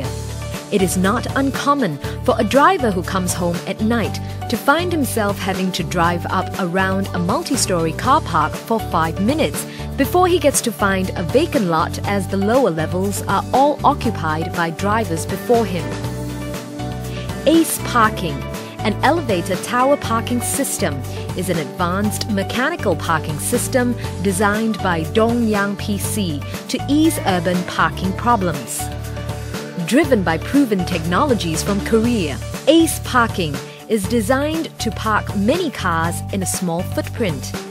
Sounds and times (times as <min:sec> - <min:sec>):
Music: 0:00.0 - 0:37.7
Speech: 0:00.7 - 0:16.0, 0:17.4 - 0:28.9, 0:29.8 - 0:37.6.